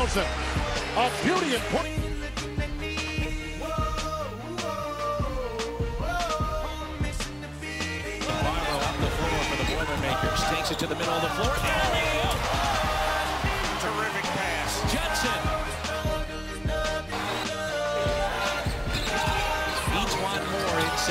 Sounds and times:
Speech: 0:00.0 - 0:01.9, 0:08.3 - 0:12.5, 0:13.6 - 0:15.5, 0:19.8 - 0:21.1
Music: 0:00.0 - 0:21.1.

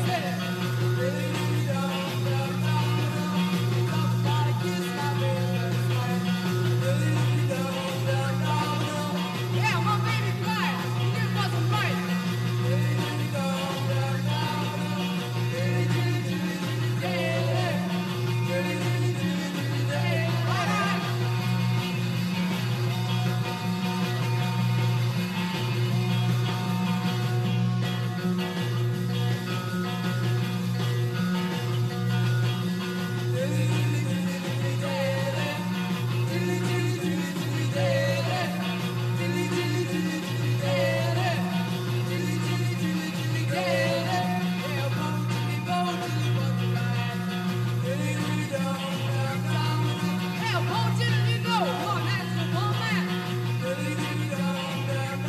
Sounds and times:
Singing: 0:00.0 - 0:21.8, 0:33.1 - 0:55.2
Music: 0:00.0 - 0:55.2.

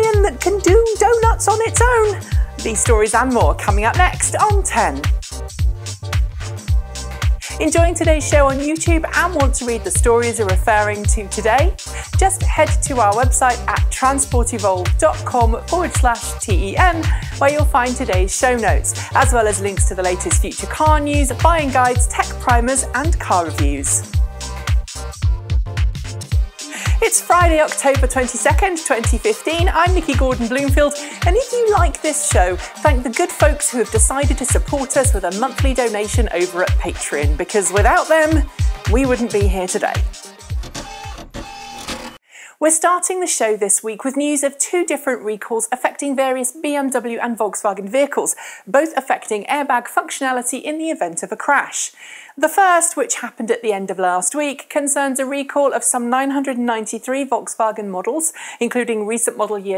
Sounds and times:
Speech: 0:00.0 - 0:05.1, 0:07.4 - 0:24.1, 0:27.0 - 0:40.1, 0:42.6 - 0:59.7
Music: 0:00.0 - 0:43.4.

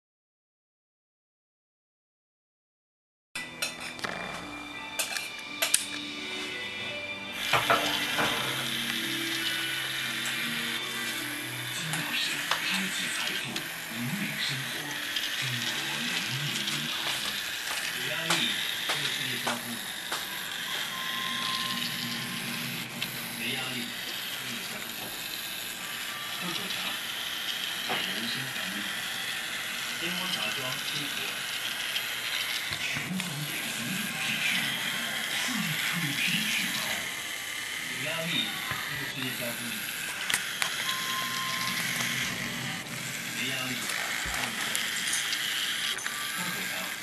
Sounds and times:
Speech: 0:11.7 - 0:20.0, 0:23.4 - 0:25.1, 0:26.3 - 0:27.0, 0:27.9 - 0:29.0, 0:30.0 - 0:31.4, 0:32.7 - 0:37.2, 0:37.8 - 0:40.0, 0:43.4 - 0:45.0, 0:46.1 - 0:47.0.

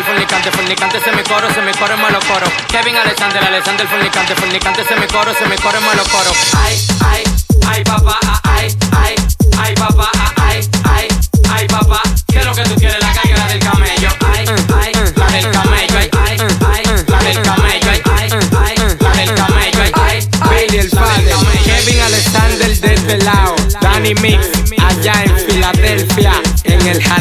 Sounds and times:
Hip hop music: 0:00.0 - 0:27.2
Rapping: 0:00.0 - 0:27.2.

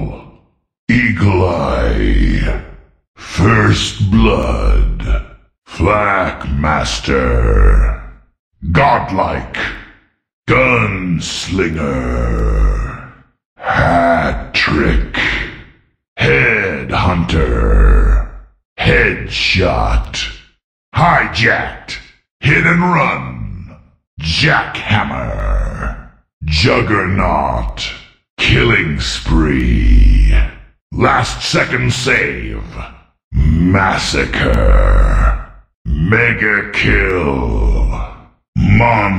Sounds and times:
Speech: 0:00.0 - 0:09.9, 0:10.5 - 0:39.1.

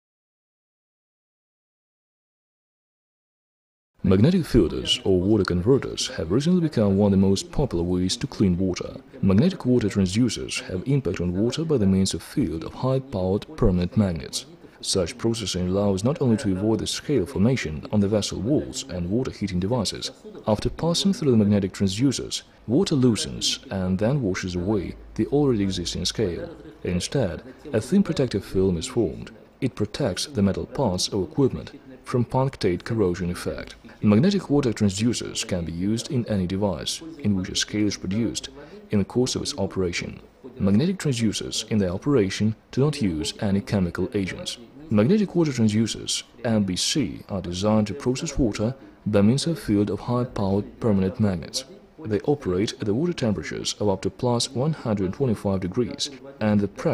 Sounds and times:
Speech: 0:04.0 - 0:56.9.

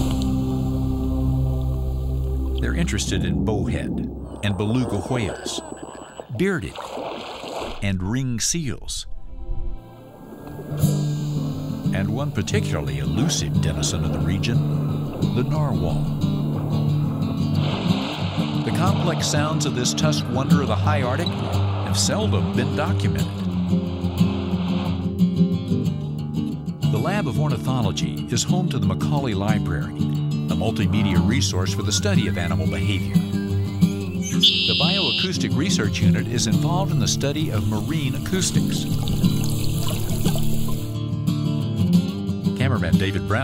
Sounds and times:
Music: 0:00.0 - 0:04.2, 0:08.6 - 0:43.4
Ocean: 0:00.0 - 0:41.0
Speech: 0:02.6 - 0:06.8, 0:07.8 - 0:09.1, 0:11.9 - 0:16.1, 0:18.7 - 0:23.4, 0:26.9 - 0:33.2, 0:34.7 - 0:38.9, 0:42.6 - 0:43.4
Whale vocalization: 0:03.3 - 0:06.4, 0:30.7 - 0:35.4.

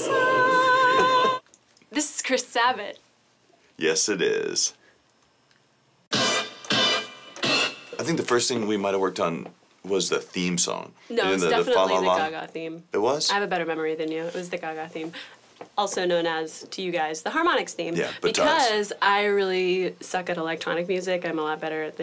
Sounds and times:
Speech: 0:08.0 - 0:15.2, 0:15.8 - 0:22.0.

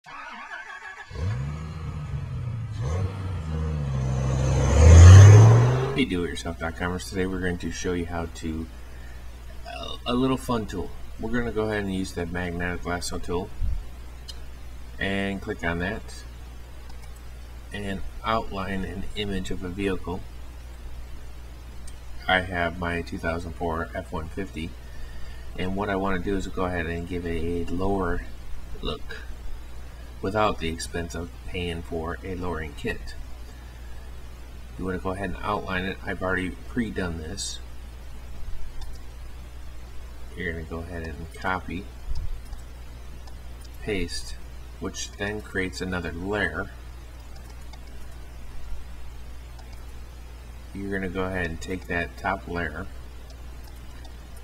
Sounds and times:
Vehicle: 0:00.1 - 0:06.2
Speech: 0:06.0 - 0:08.7, 0:09.6 - 0:13.6, 0:15.0 - 0:16.3, 0:17.7 - 0:20.3, 0:22.2 - 0:24.8, 0:25.6 - 0:29.3, 0:30.2 - 0:33.2, 0:34.8 - 0:37.7, 0:40.3 - 0:41.9, 0:43.8 - 0:46.8, 0:50.7 - 0:52.9.

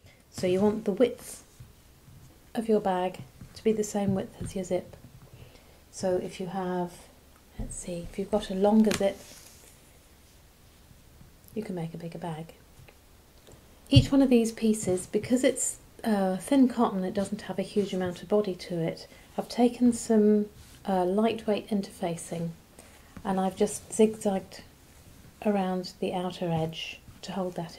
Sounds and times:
Speech: 0:00.3 - 0:01.5, 0:02.6 - 0:05.0, 0:05.9 - 0:09.3, 0:11.5 - 0:12.6, 0:13.9 - 0:22.6, 0:23.2 - 0:24.7, 0:25.4 - 0:27.7.

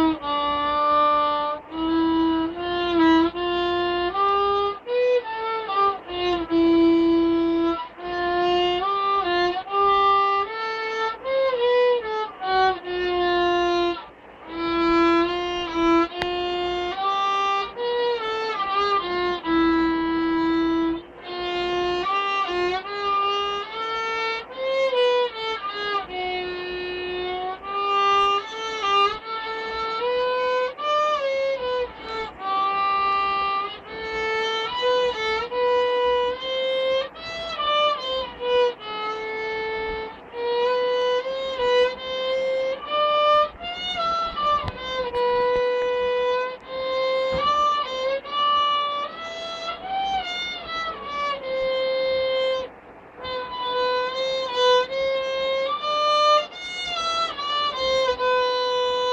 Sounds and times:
Violin, fiddle: 0:00.0 - 0:59.1.

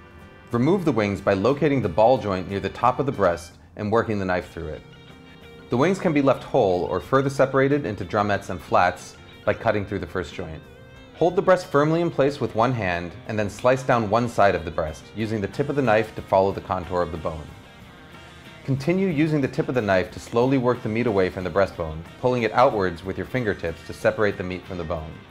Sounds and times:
Music: 0:00.0 - 0:25.3
Speech: 0:00.5 - 0:04.8, 0:05.7 - 0:10.6, 0:11.2 - 0:17.5, 0:18.6 - 0:25.3.

